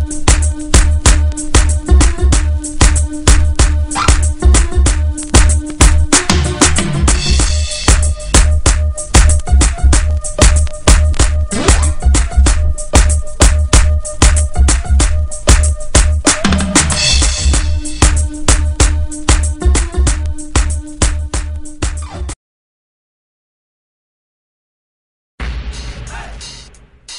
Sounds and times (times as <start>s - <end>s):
Music: 0.0s - 22.4s, 25.4s - 27.1s.